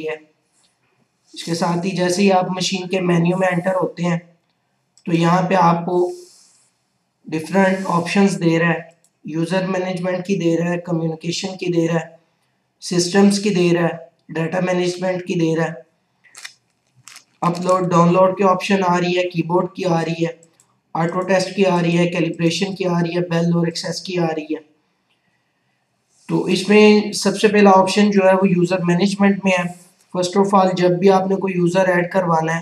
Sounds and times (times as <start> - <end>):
Speech: 0.0 - 0.2, 1.4 - 4.2, 5.1 - 6.4, 7.3 - 12.1, 12.8 - 15.8, 17.4 - 20.4, 21.0 - 24.6, 26.3 - 32.6
Inside, small room: 0.0 - 32.6.